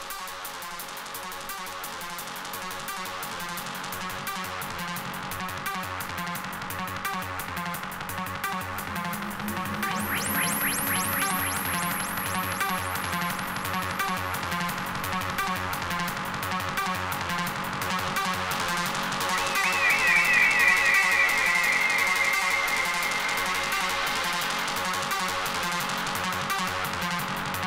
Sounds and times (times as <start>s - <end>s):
Music: 0.0s - 27.6s.